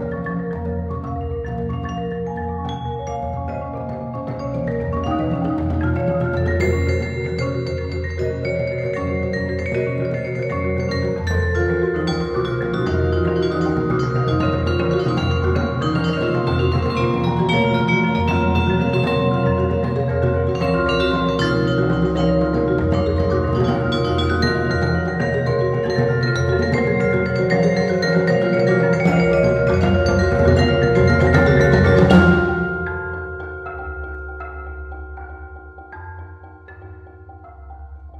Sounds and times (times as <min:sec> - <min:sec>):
Marimba, xylophone: 0:00.0 - 0:38.1
Vibraphone: 0:00.0 - 0:38.1.